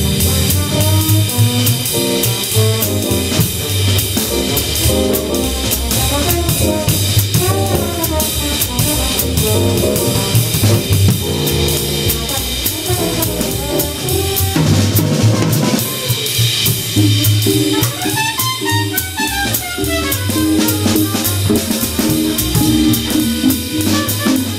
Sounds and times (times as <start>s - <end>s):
Drum: 0.0s - 24.5s
Drum kit: 0.0s - 24.5s
Jazz: 0.0s - 24.5s.